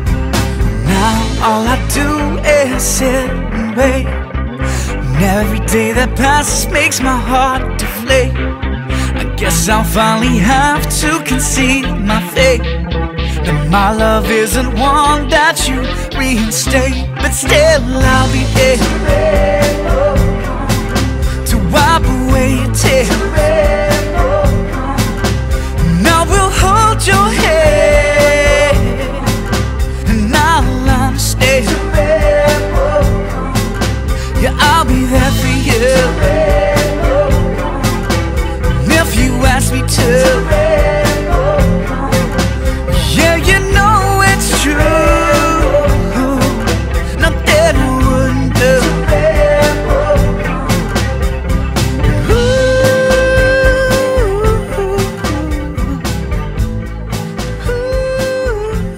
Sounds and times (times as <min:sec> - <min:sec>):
Music: 0:00.0 - 0:58.9.